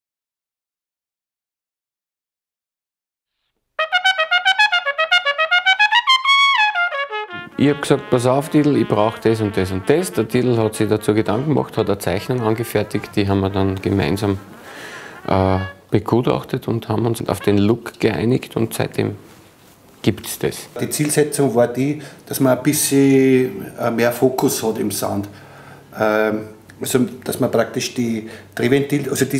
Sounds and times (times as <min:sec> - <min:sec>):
Trumpet: 0:03.8 - 0:16.4, 0:17.1 - 0:18.1
Speech: 0:07.5 - 0:14.5, 0:15.2 - 0:19.2, 0:20.0 - 0:29.3.